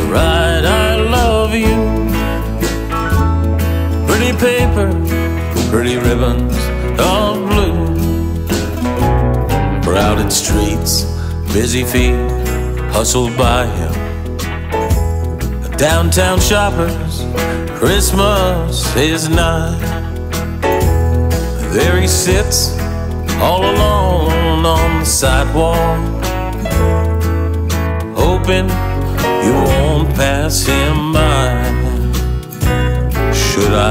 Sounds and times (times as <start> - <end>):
Christmas music: 0.0 - 33.9.